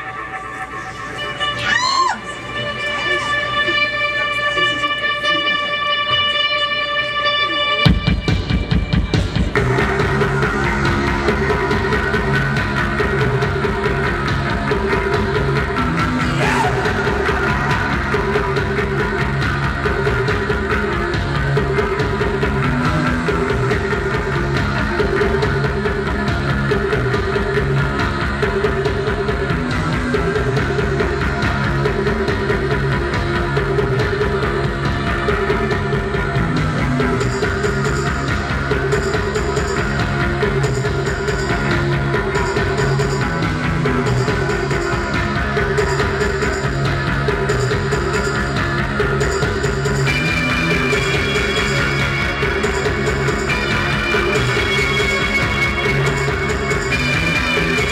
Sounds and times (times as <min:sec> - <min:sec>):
Music: 0:00.0 - 0:57.9.